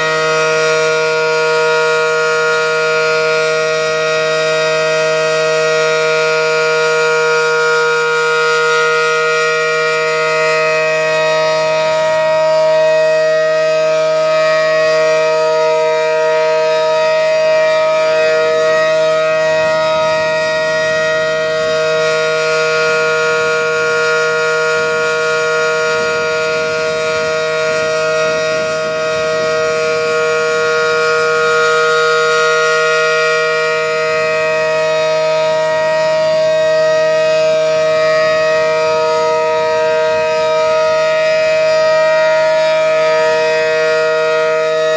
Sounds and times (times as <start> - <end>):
Civil defense siren: 0.0 - 44.9.